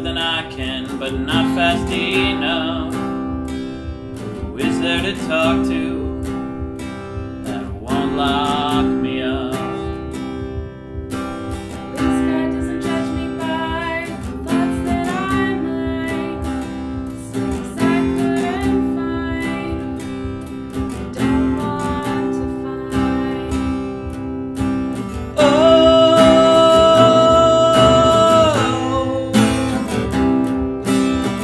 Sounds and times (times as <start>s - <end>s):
Strum: 0.0s - 31.4s
Singing: 12.0s - 20.0s, 25.4s - 29.8s.